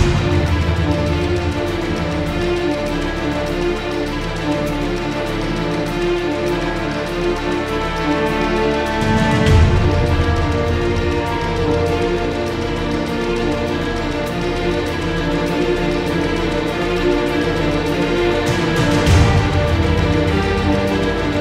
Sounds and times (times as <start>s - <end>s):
Background music: 0.0s - 21.4s.